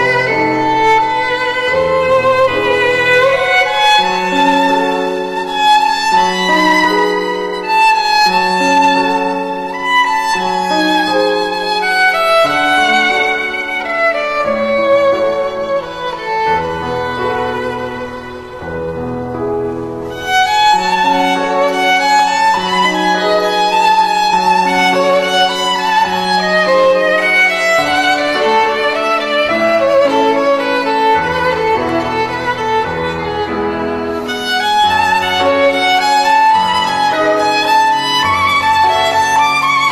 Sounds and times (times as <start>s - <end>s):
Violin, fiddle: 0.0s - 39.9s.